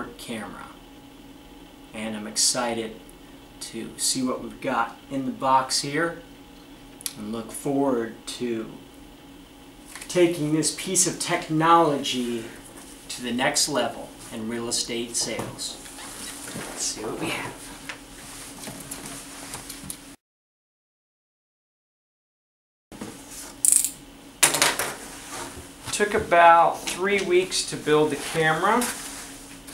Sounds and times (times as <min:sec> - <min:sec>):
Speech: 0:00.0 - 0:00.8, 0:01.9 - 0:03.0, 0:03.6 - 0:06.3, 0:07.1 - 0:08.8, 0:10.1 - 0:15.8, 0:16.7 - 0:17.6, 0:25.9 - 0:29.0.